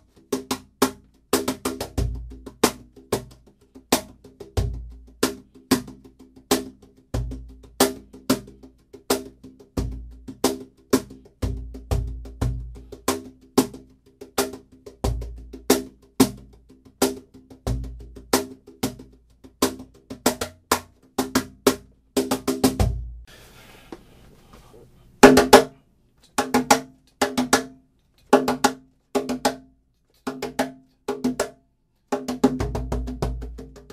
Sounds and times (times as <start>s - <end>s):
Music: 0.0s - 23.3s, 25.2s - 33.9s.